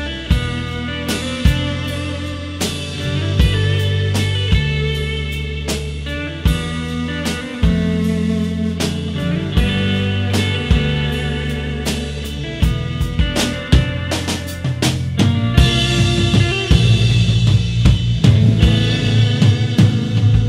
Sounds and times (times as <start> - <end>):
Drum: 0.0 - 20.4.